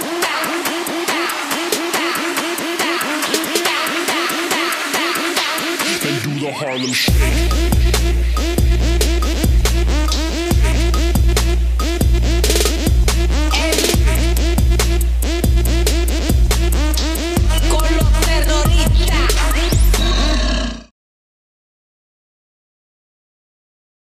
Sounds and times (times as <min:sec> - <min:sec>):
Music: 0:00.0 - 0:20.3.